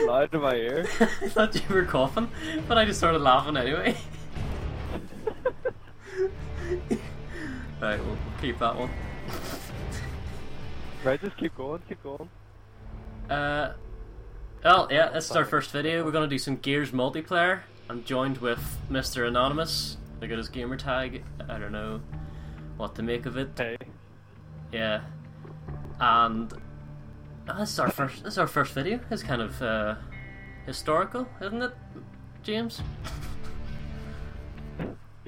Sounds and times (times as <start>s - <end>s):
Speech: 14.6s - 22.0s, 27.5s - 30.0s.